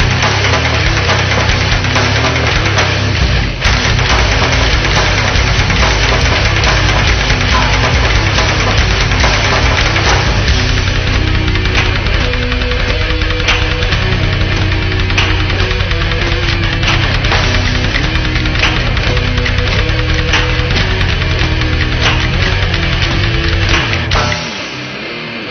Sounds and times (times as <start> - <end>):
Music: 0.0 - 25.5.